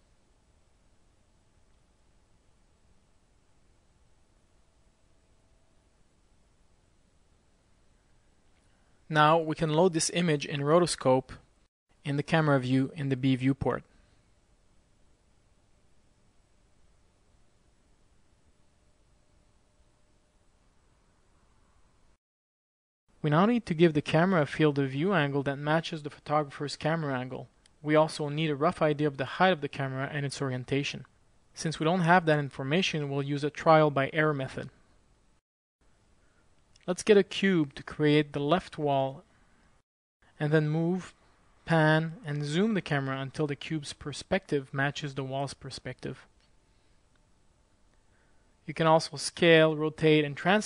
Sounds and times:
Speech: 0:09.1 - 0:13.9, 0:23.2 - 0:34.8, 0:36.8 - 0:39.2, 0:40.4 - 0:46.3, 0:48.7 - 0:50.6.

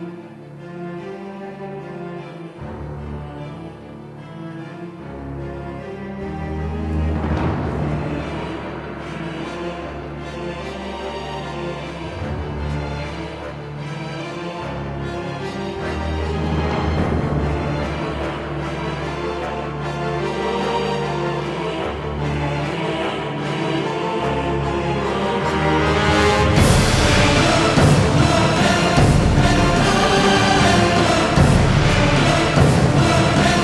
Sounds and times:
Music: 0:00.0 - 0:33.6.

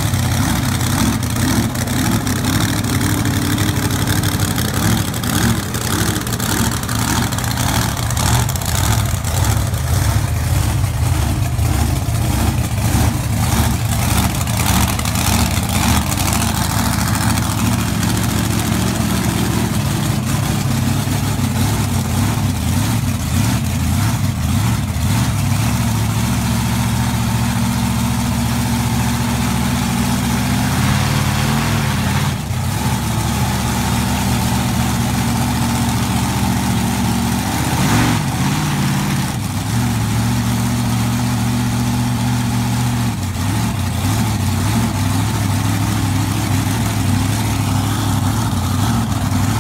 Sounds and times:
Vehicle: 0:00.0 - 0:49.6.

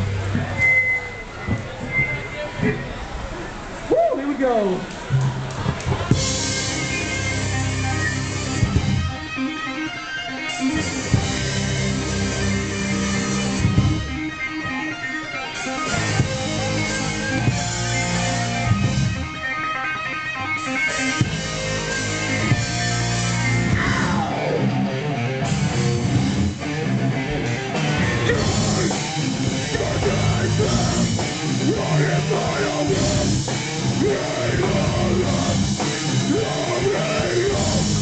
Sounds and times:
Music: 0:00.0 - 0:03.0, 0:05.1 - 0:38.0
Speech: 0:03.9 - 0:04.9.

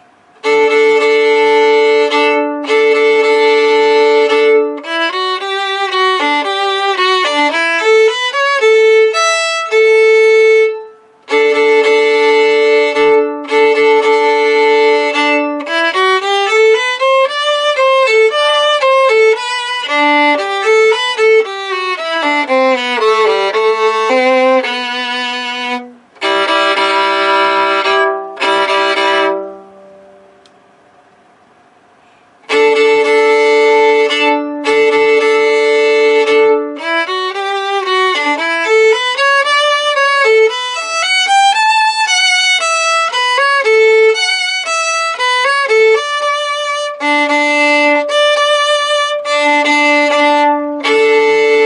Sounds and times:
Violin, fiddle: 0:00.0 - 0:30.2, 0:32.4 - 0:51.6.

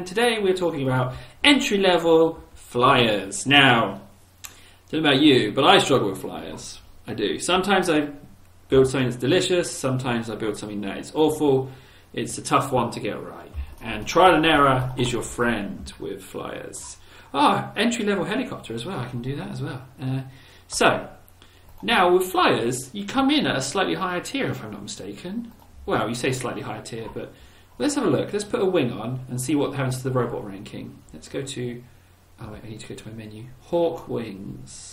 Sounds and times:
Speech: 0:00.0 - 0:04.1, 0:04.9 - 0:21.2, 0:21.8 - 0:34.9.

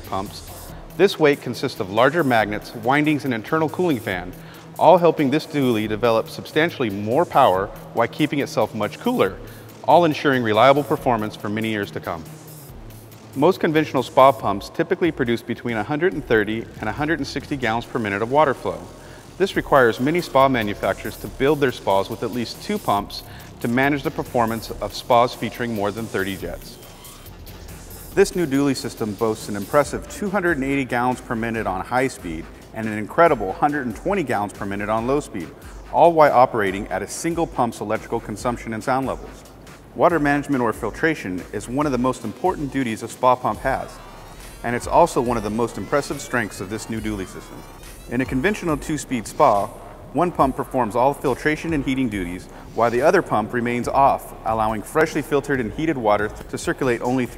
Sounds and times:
Speech: 0:00.0 - 0:12.3, 0:13.4 - 0:26.8, 0:28.2 - 0:39.4, 0:40.0 - 0:44.0, 0:44.6 - 0:47.5, 0:48.1 - 0:57.3.

